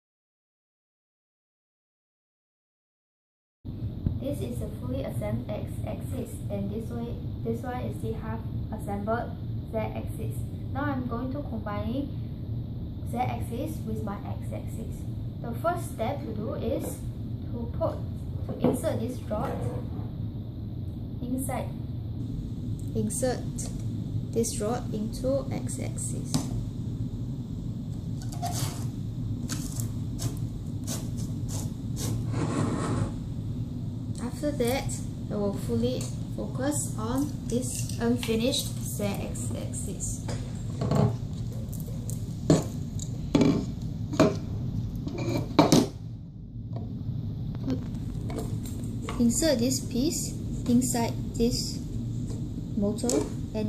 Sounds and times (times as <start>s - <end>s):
Speech: 4.2s - 12.2s, 13.1s - 19.9s, 21.2s - 21.8s, 22.9s - 23.8s, 24.4s - 26.5s, 34.2s - 40.3s, 49.1s - 51.9s, 52.8s - 53.6s.